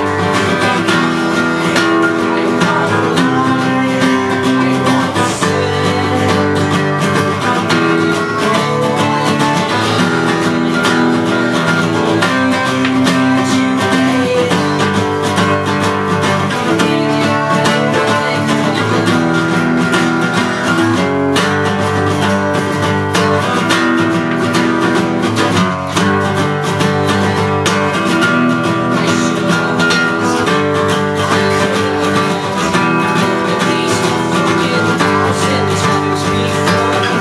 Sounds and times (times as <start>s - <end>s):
Music: 0.0s - 37.2s.